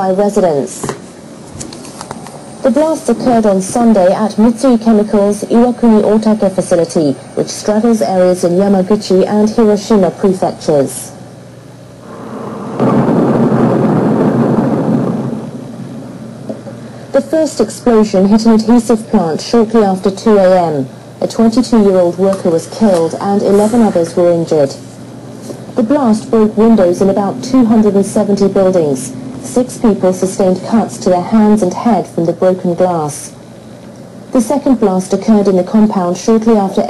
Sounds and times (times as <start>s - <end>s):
Speech: 0.0s - 1.0s, 2.6s - 11.2s, 17.2s - 24.9s, 25.8s - 33.4s, 34.4s - 36.8s.